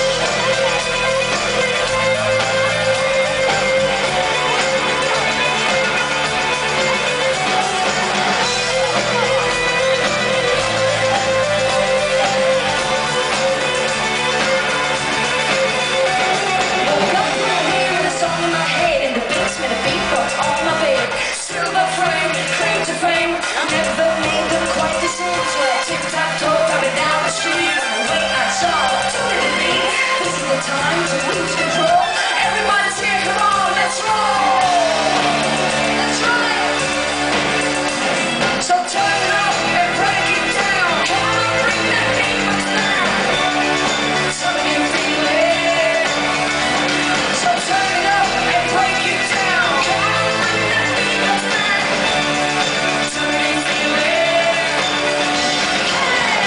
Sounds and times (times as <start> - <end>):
Music: 0.0 - 56.4.